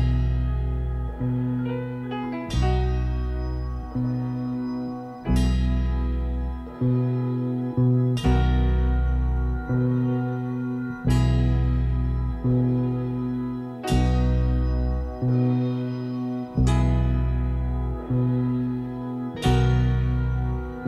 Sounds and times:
Music: 0.0s - 20.8s.

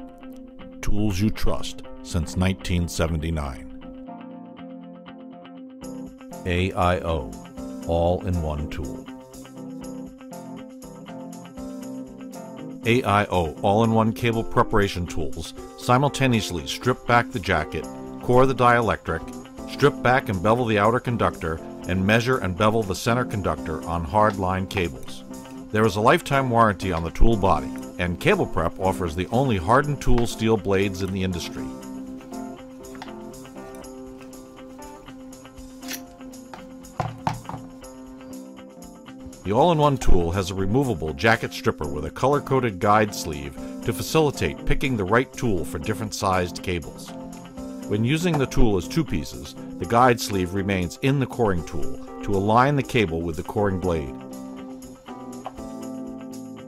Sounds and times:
Music: 0.0s - 56.6s
Speech: 0.8s - 3.7s, 6.4s - 9.1s, 12.9s - 31.8s, 39.5s - 47.1s, 47.9s - 54.2s.

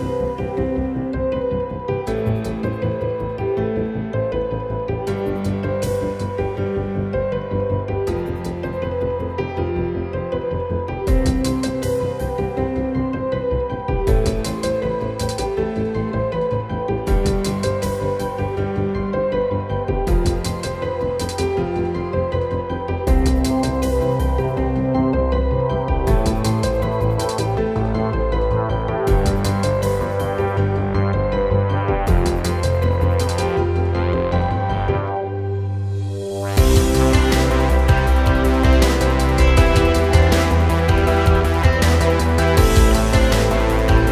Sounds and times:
Music: 0.0s - 44.1s.

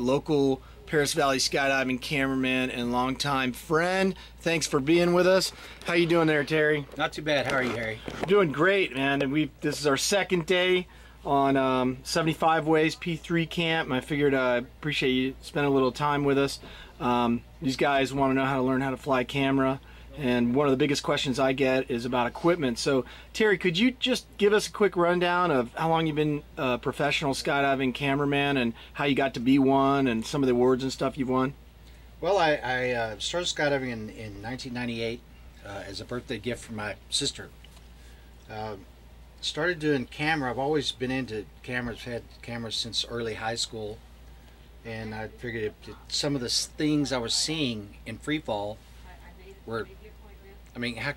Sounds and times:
Speech: 0.0s - 31.6s, 32.2s - 37.6s, 38.5s - 44.0s, 44.8s - 51.1s.

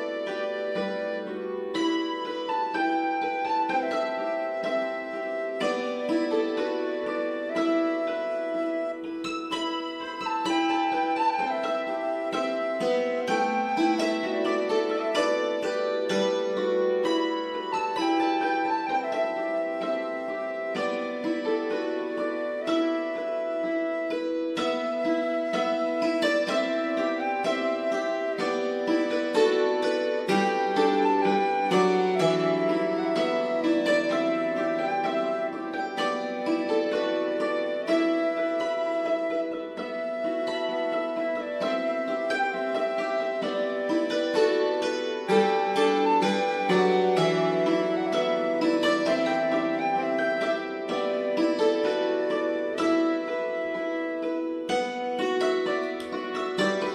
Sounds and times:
Harp: 0.0s - 56.9s.

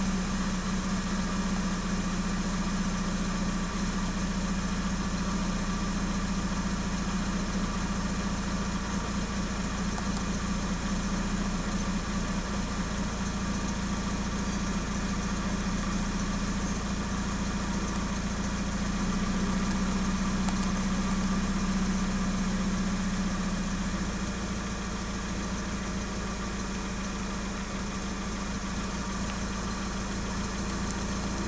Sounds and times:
Medium engine (mid frequency): 0.0s - 31.4s.

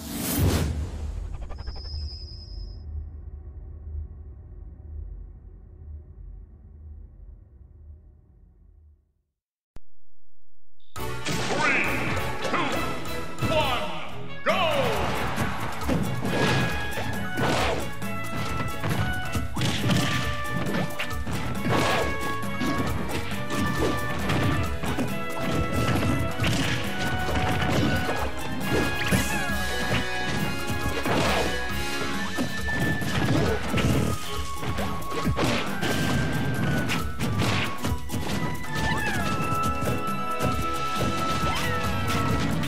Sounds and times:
Music: 11.0s - 42.6s
Smash, crash: 11.2s - 12.2s, 14.9s - 31.7s, 32.3s - 39.0s.

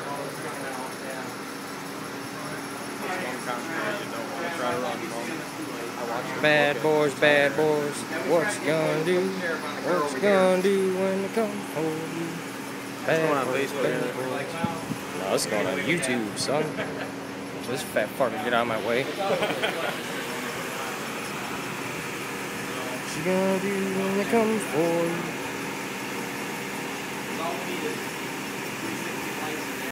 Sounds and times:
Speech: 0.0s - 1.4s, 2.1s - 12.4s, 13.0s - 17.0s, 17.6s - 19.8s, 27.3s - 28.1s, 28.8s - 29.9s.

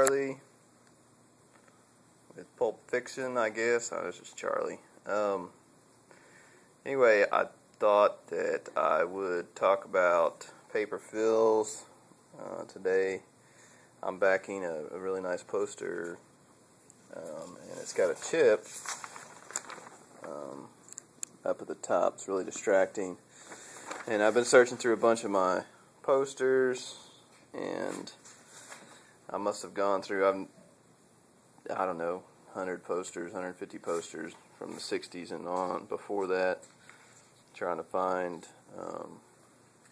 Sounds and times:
Speech: 0.0s - 0.5s, 2.3s - 5.6s, 6.8s - 13.3s, 14.0s - 16.2s, 17.1s - 18.7s, 20.2s - 20.7s, 21.4s - 23.2s, 24.1s - 28.2s, 29.3s - 30.6s, 31.6s - 36.7s, 37.5s - 39.2s.

